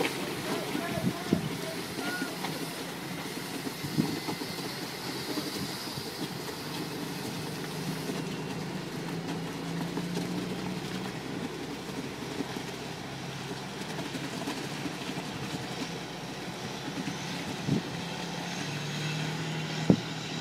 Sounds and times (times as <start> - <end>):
Truck: 0.0 - 20.4.